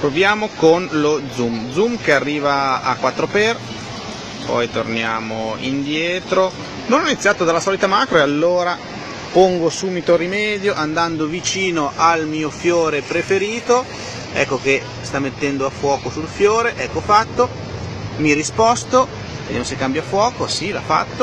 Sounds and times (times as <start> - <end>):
Speech: 0.0 - 3.7, 4.4 - 17.6, 18.2 - 21.2.